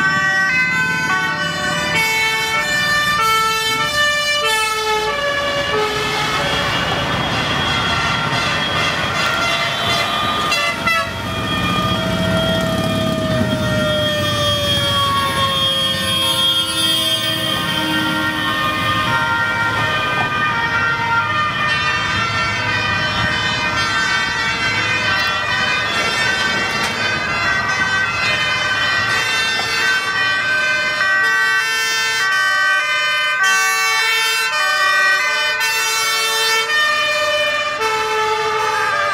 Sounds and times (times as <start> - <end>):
Fire engine, fire truck (siren): 0.0 - 39.1.